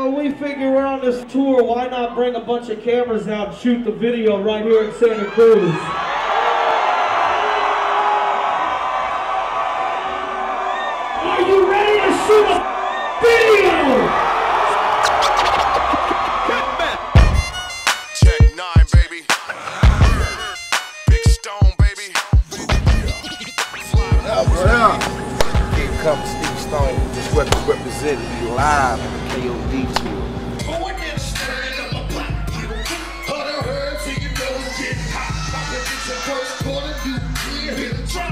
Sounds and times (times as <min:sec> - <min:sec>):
Music: 0:15.3 - 0:38.3.